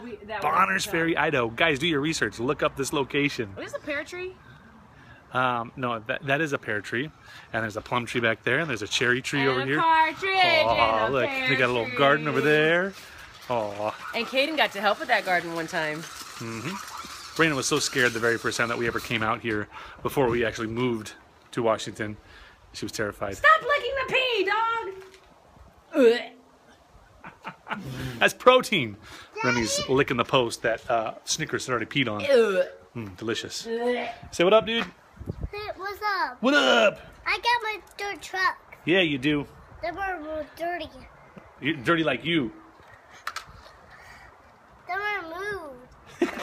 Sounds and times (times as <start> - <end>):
Outside, rural or natural: 0.0 - 46.4.